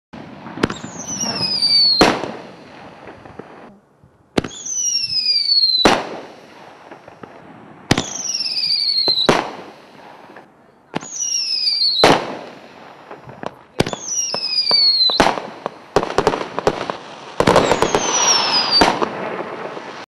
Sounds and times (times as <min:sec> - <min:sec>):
Fireworks: 0:00.2 - 0:20.0
Outside, urban or manmade: 0:00.2 - 0:20.0.